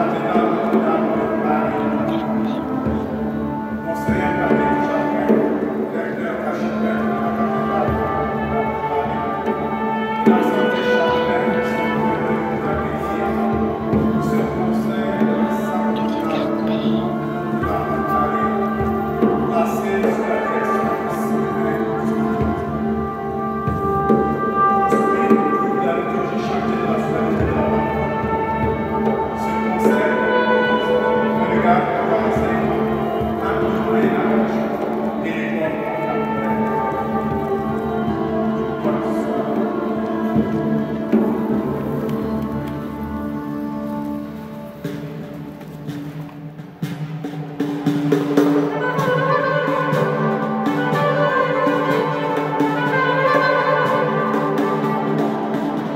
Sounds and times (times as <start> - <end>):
Mantra: 0.0 - 44.2.